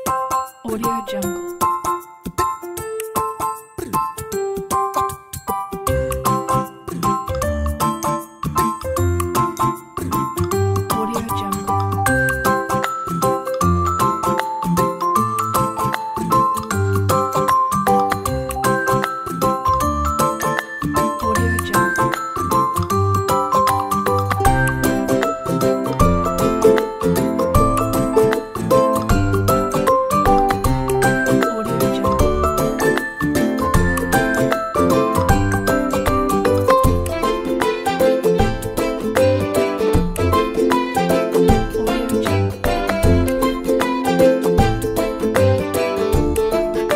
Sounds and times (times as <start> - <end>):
Music: 0.0 - 46.9
Speech: 0.7 - 1.4, 10.9 - 11.7, 21.2 - 22.1, 31.4 - 32.2.